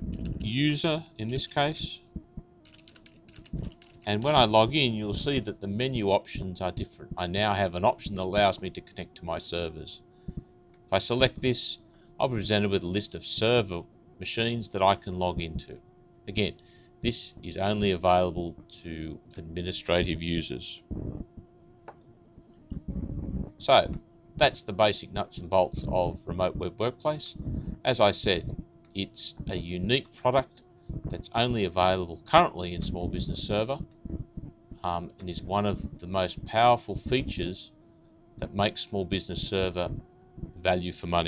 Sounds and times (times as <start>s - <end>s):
Bee, wasp, etc.: 0.0s - 41.2s
Fly, housefly: 0.0s - 41.2s.